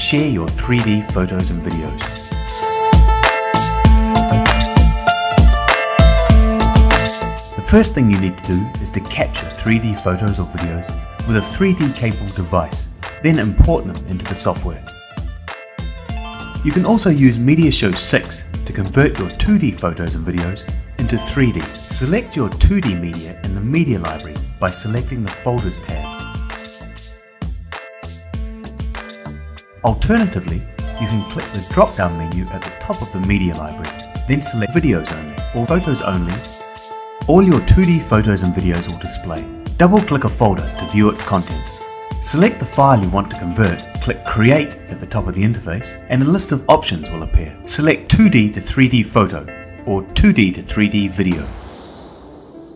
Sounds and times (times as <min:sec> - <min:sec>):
Speech: 0:00.0 - 0:02.1, 0:07.6 - 0:14.9, 0:16.6 - 0:26.2, 0:29.8 - 0:36.5, 0:37.3 - 0:51.5
Music: 0:00.0 - 0:52.7.